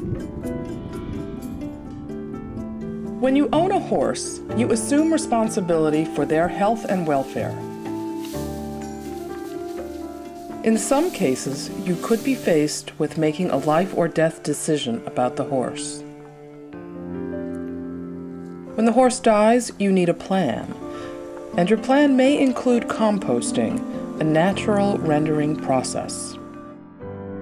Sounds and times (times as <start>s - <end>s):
Music: 0.0s - 27.4s
Speech: 3.2s - 7.6s, 10.6s - 16.0s, 18.8s - 20.8s, 21.6s - 26.4s.